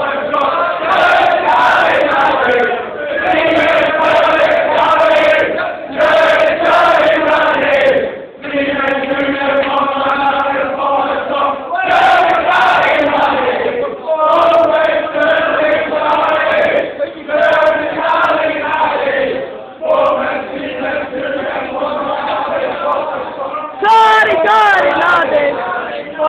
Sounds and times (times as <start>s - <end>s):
Speech: 23.5s - 25.4s.